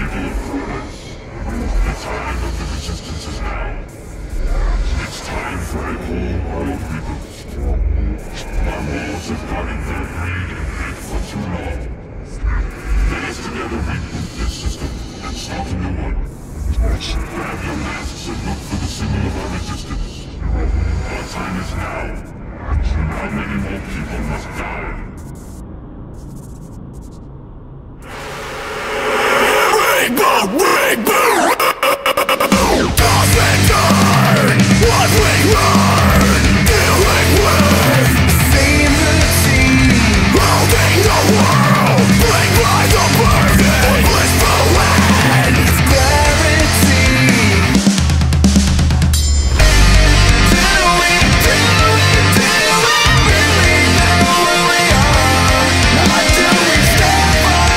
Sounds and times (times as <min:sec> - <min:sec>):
Exciting music: 0:28.9 - 0:57.7.